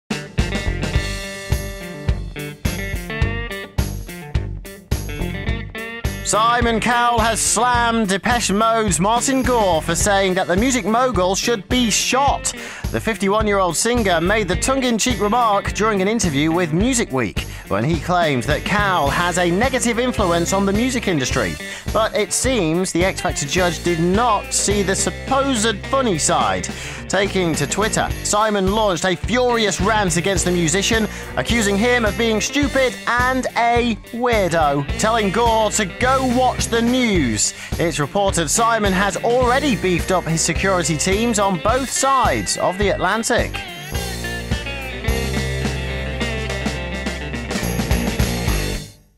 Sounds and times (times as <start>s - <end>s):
Music: 0.0s - 49.1s
Speech: 6.3s - 43.6s.